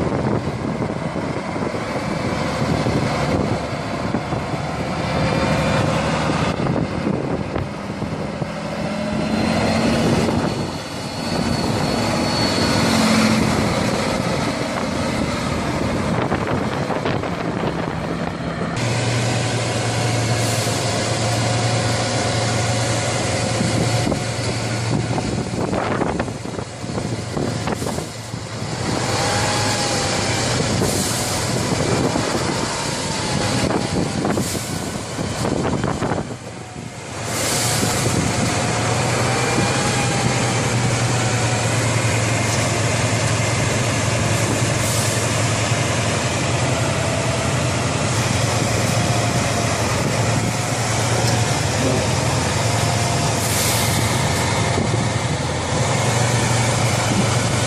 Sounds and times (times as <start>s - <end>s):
Air brake: 30.8s - 31.4s, 34.3s - 34.9s, 37.3s - 38.1s, 44.8s - 45.3s, 53.4s - 54.1s.